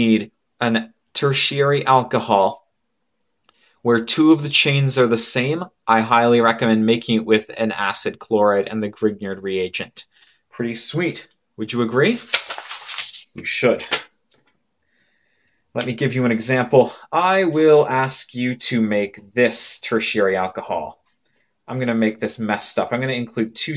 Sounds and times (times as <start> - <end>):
Speech: 0.0 - 2.7, 3.8 - 12.3, 13.3 - 14.0, 15.8 - 21.0, 21.7 - 23.7.